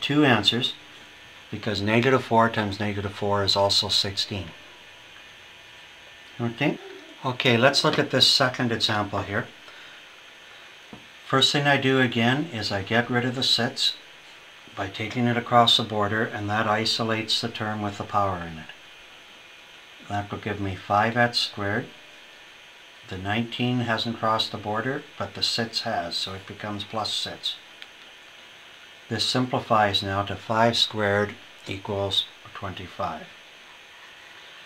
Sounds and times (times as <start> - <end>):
Speech: 0.0 - 0.8, 1.5 - 4.6, 6.4 - 9.6, 11.2 - 14.0, 14.7 - 18.8, 20.0 - 22.0, 23.0 - 27.7, 29.1 - 33.4.